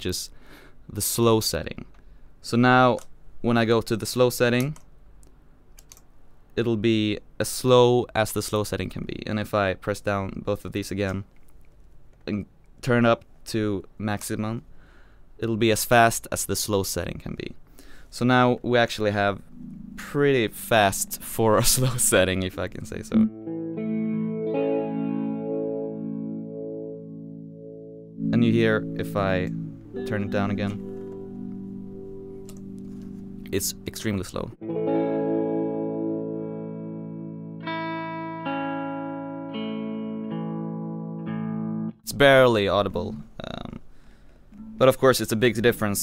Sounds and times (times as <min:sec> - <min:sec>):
Speech: 0:00.0 - 0:04.8, 0:06.6 - 0:11.3, 0:12.2 - 0:14.6, 0:15.4 - 0:19.4, 0:20.0 - 0:23.3, 0:28.3 - 0:30.8, 0:33.5 - 0:34.6, 0:42.0 - 0:43.8, 0:44.8 - 0:46.0
Effects unit: 0:18.6 - 0:42.2, 0:43.9 - 0:46.0
Guitar: 0:18.7 - 0:43.2, 0:44.5 - 0:46.0.